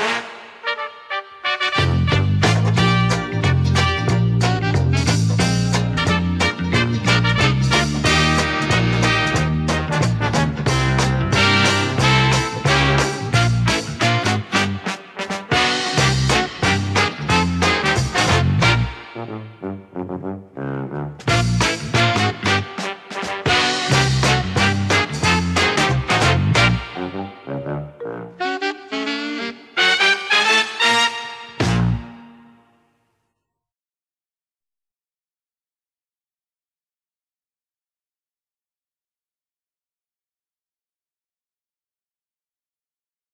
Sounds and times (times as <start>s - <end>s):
Music: 0.0s - 33.7s.